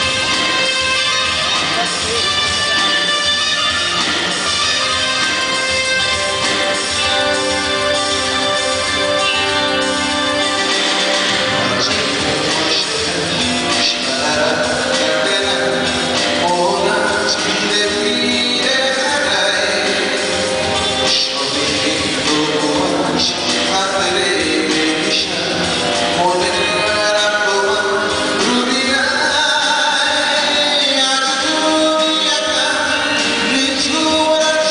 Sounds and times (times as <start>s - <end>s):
Music: 0.0s - 34.7s
Male singing: 11.6s - 34.7s.